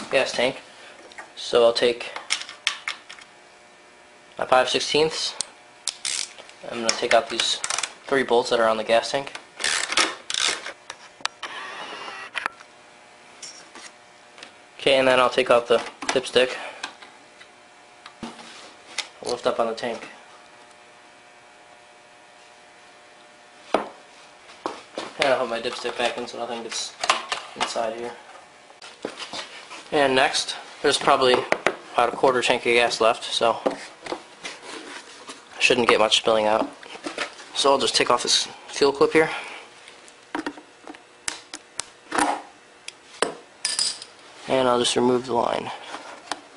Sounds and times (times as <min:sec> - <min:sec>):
Speech: 0:00.0 - 0:00.6, 0:01.4 - 0:02.2, 0:04.4 - 0:05.4, 0:06.6 - 0:09.4, 0:14.8 - 0:16.7, 0:19.2 - 0:20.2, 0:25.2 - 0:27.0, 0:27.6 - 0:28.2, 0:29.9 - 0:33.8, 0:35.6 - 0:36.8, 0:37.6 - 0:39.4, 0:44.5 - 0:45.8.